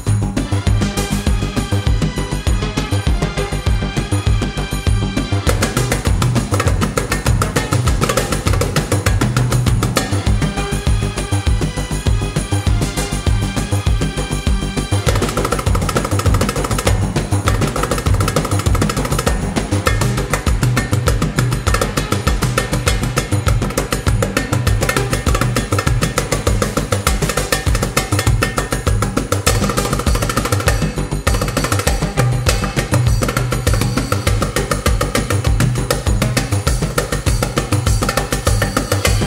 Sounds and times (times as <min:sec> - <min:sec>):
Folk music: 0:00.0 - 0:39.2.